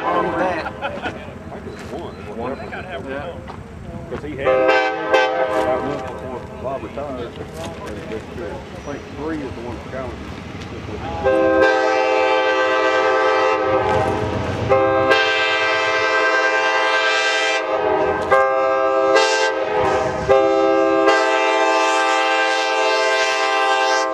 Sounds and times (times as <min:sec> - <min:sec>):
Train horn: 0:00.0 - 0:00.5, 0:04.4 - 0:06.2, 0:11.1 - 0:24.1
Vehicle horn, car horn, honking: 0:11.2 - 0:13.9, 0:14.7 - 0:24.1.